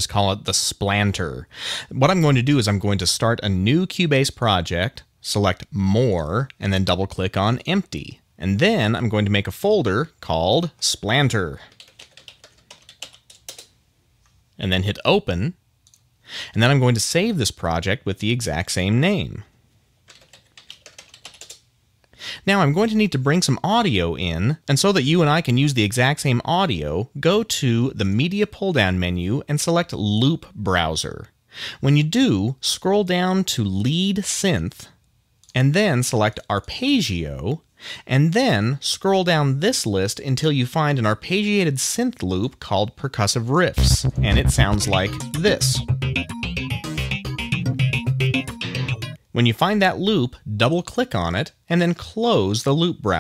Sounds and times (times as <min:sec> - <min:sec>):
Speech: 0:00.0 - 0:11.8, 0:14.6 - 0:15.6, 0:16.5 - 0:19.5, 0:22.4 - 0:45.9, 0:49.3 - 0:53.2.